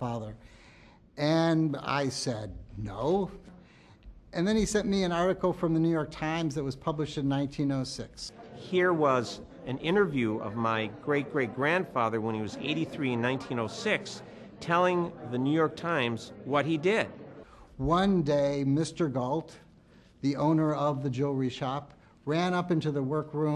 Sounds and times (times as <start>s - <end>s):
Speech: 0.0s - 0.4s, 1.2s - 3.6s, 4.3s - 23.5s.